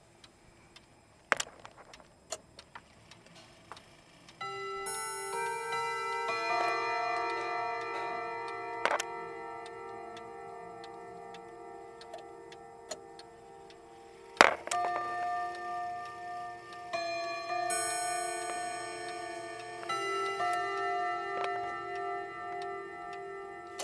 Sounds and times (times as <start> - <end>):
Music: 4.4 - 23.8.